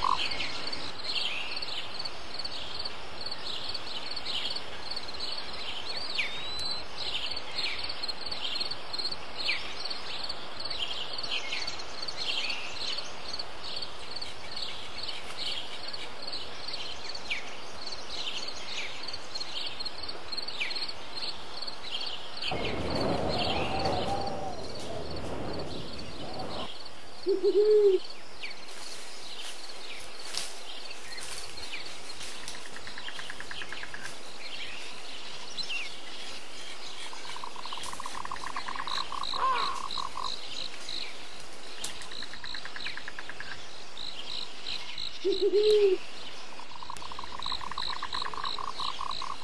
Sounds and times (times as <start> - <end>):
Outside, rural or natural: 0.0 - 49.4
Chirp, tweet: 3.4 - 8.8, 30.7 - 49.4.